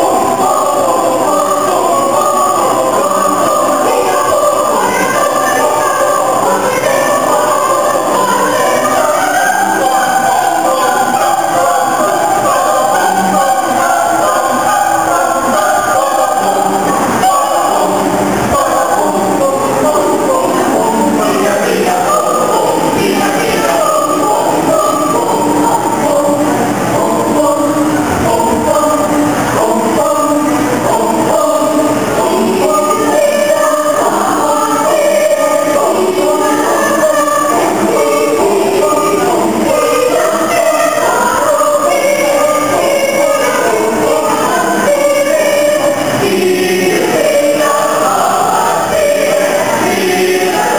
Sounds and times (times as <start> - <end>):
Choir: 0.0 - 50.7.